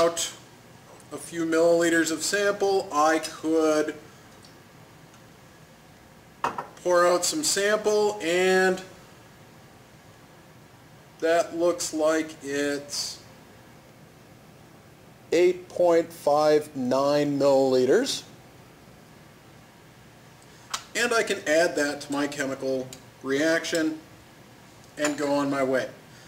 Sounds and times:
Speech: 0.0s - 0.4s, 1.1s - 4.0s, 6.8s - 8.9s, 11.2s - 13.3s, 15.3s - 18.3s, 20.9s - 24.1s, 25.0s - 26.0s.

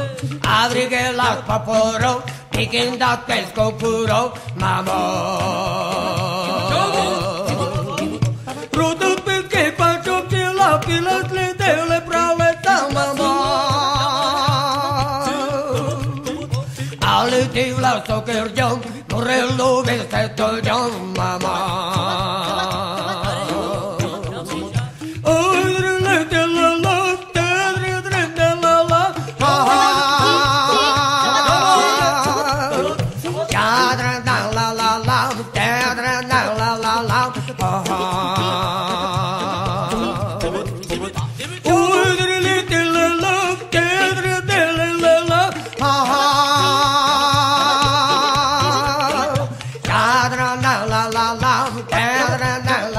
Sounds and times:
Music: 0.0s - 52.9s.

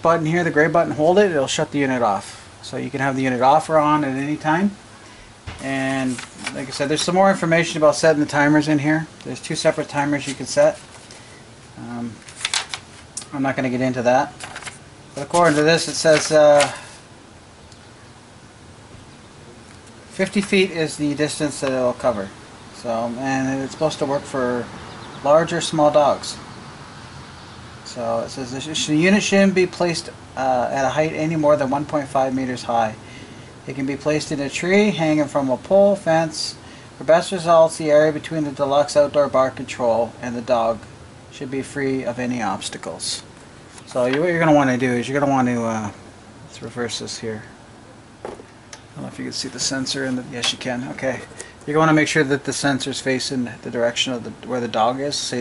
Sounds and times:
Speech: 0.0s - 4.8s, 5.6s - 10.8s, 11.8s - 12.2s, 13.2s - 14.4s, 15.2s - 16.9s, 20.1s - 26.5s, 27.9s - 33.0s, 33.7s - 43.3s, 43.9s - 47.6s, 49.0s - 55.4s.

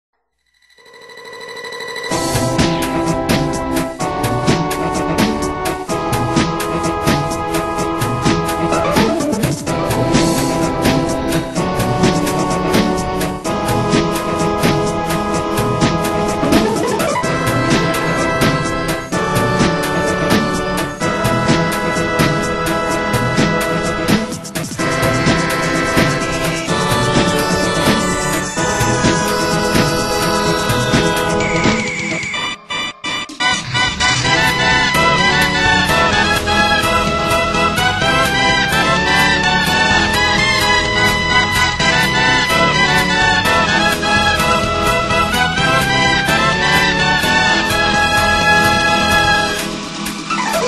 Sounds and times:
Music: 1.6s - 50.6s.

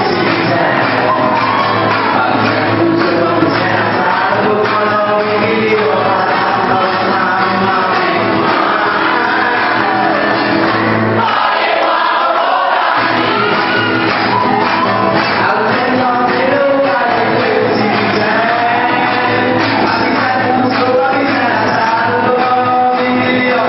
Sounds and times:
Crowd: 0.0s - 23.6s
Music: 0.0s - 23.6s.

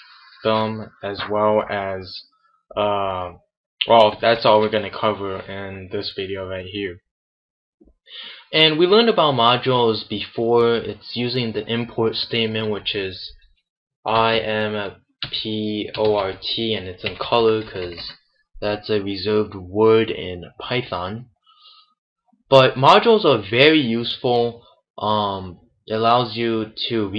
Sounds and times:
Speech: 0.0s - 7.0s, 8.2s - 13.4s, 14.1s - 21.3s, 22.5s - 27.1s.

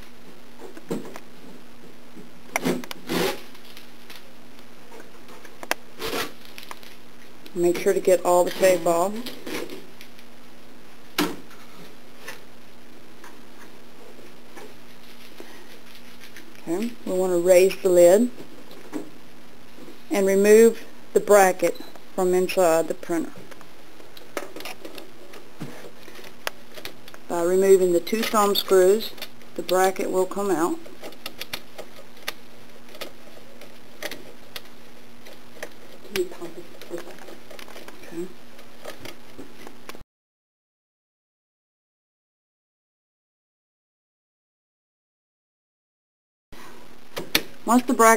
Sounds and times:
Speech: 7.5s - 9.3s, 16.6s - 18.4s, 20.1s - 23.4s, 27.3s - 30.8s, 36.1s - 37.1s, 38.0s - 38.4s, 47.7s - 48.1s.

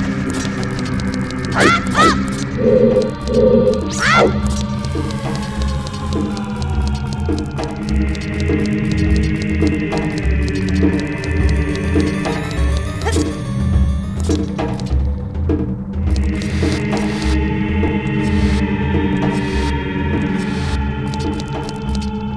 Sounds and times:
Music: 0.0s - 22.3s.

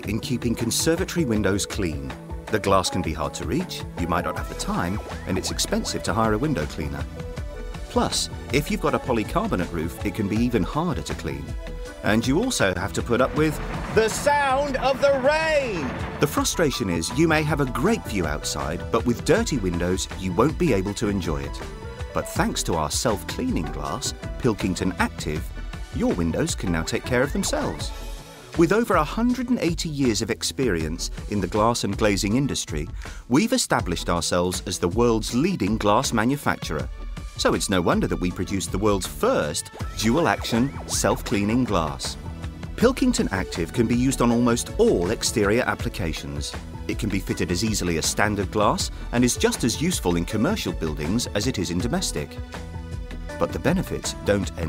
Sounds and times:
Speech: 0.0s - 7.1s, 7.9s - 27.9s, 28.6s - 42.2s, 42.8s - 52.4s, 53.4s - 54.6s
Music: 0.0s - 54.6s.

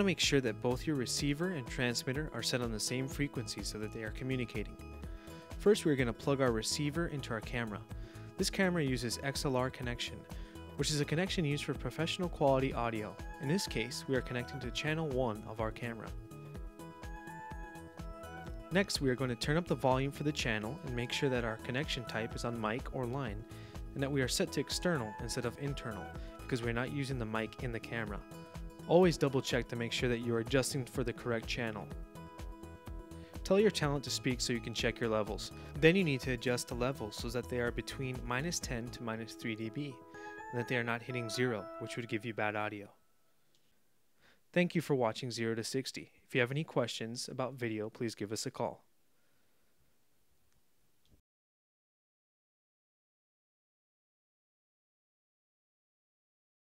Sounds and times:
Speech: 0.0s - 4.8s, 5.6s - 16.2s, 18.7s - 23.4s, 24.0s - 28.2s, 28.9s - 32.0s, 33.4s - 43.0s, 44.5s - 48.9s
Music: 0.0s - 43.2s.

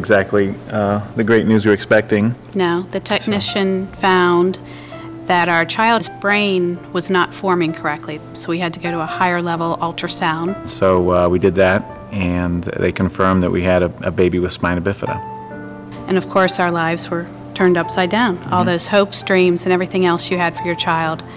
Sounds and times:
Speech: 0.0s - 4.4s, 5.3s - 15.2s, 16.1s - 21.2s
Music: 0.0s - 21.3s.

